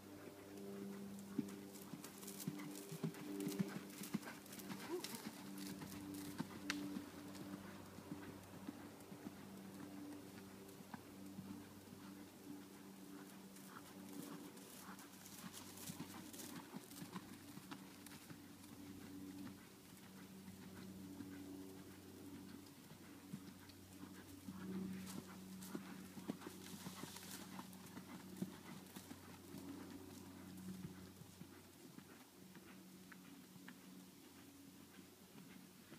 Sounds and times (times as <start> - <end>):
Clip-clop: 0.0 - 35.9.